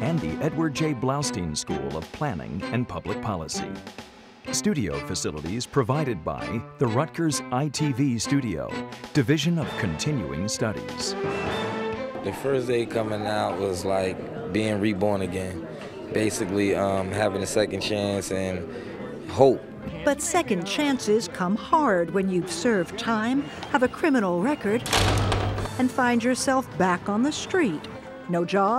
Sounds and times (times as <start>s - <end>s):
Music: 0.0s - 28.7s.